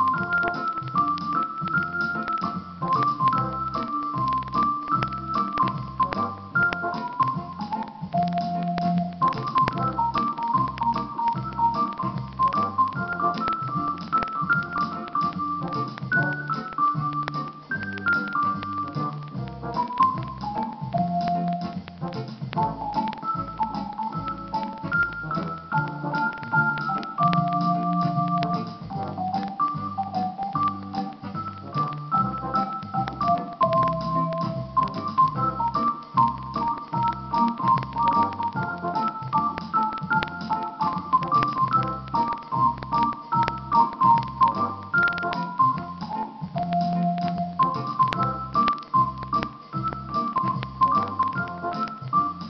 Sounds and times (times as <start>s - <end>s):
Music: 0.0s - 52.4s.